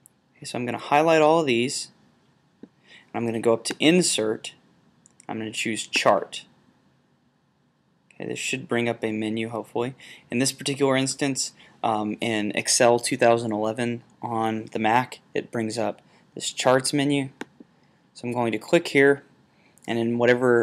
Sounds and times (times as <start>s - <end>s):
Speech: 0.4s - 2.0s, 3.1s - 4.6s, 5.2s - 6.6s, 8.2s - 17.4s, 18.2s - 19.3s, 19.9s - 20.6s.